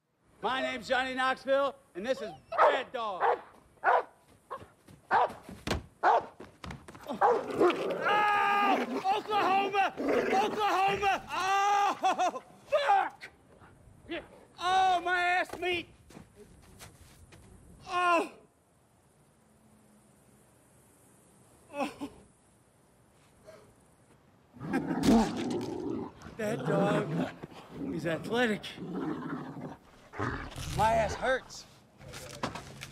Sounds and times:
Outside, rural or natural: 0.0 - 32.9
Speech: 0.4 - 3.2, 9.0 - 11.4, 14.1 - 15.9, 26.4 - 28.8, 30.7 - 31.7.

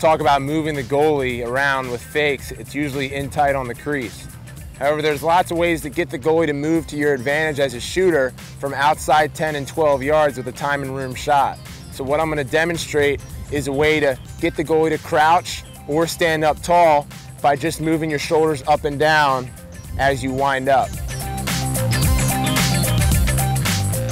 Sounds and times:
Speech: 0.0 - 4.2, 4.8 - 20.9
Music: 0.0 - 24.1.

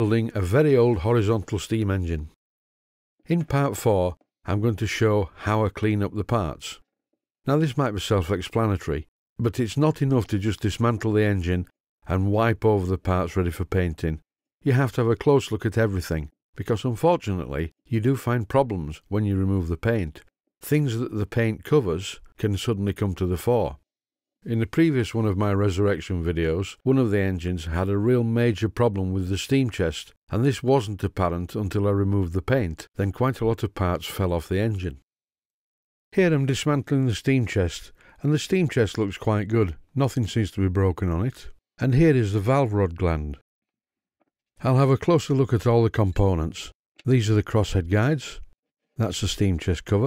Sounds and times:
Speech: 0.0 - 2.4, 3.2 - 6.8, 7.5 - 23.8, 24.4 - 35.0, 36.1 - 43.4, 44.6 - 50.0.

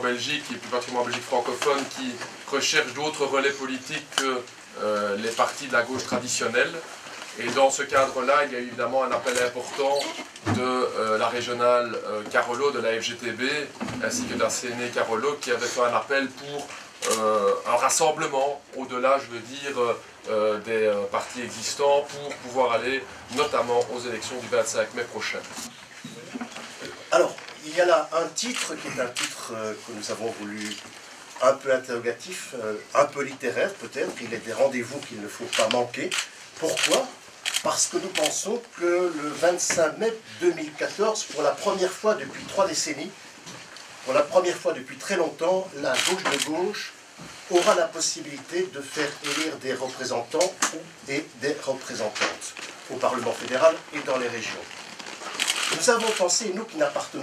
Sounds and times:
Speech: 0.0 - 25.7, 26.8 - 30.8, 31.4 - 43.2, 44.1 - 54.7, 55.7 - 57.2.

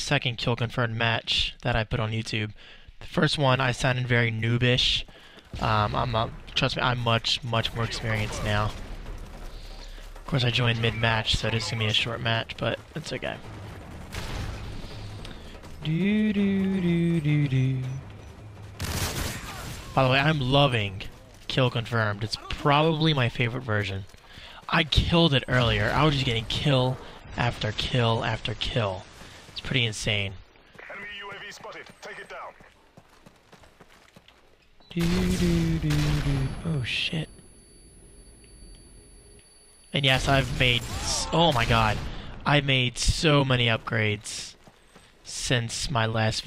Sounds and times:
Speech: 0.0 - 8.8, 10.3 - 13.4, 15.8 - 18.0, 20.0 - 29.0, 29.6 - 32.6, 34.9 - 37.3, 40.0 - 44.6, 45.3 - 46.4.

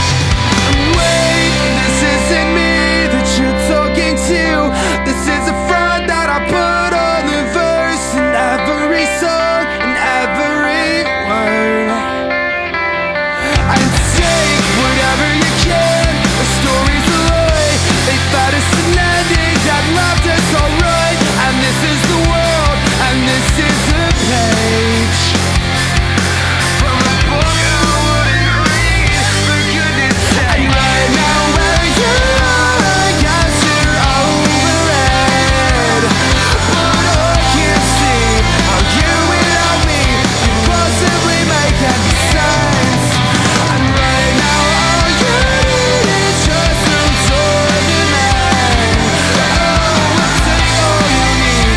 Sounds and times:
Music: 0.0 - 51.7.

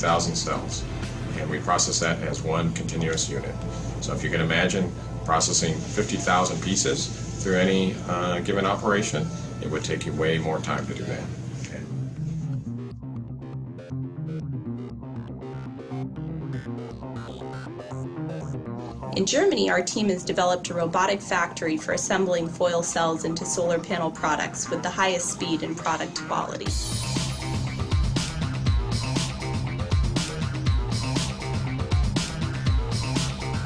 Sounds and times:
Music: 0.0 - 33.6
Speech: 1.4 - 11.9, 19.2 - 26.7.

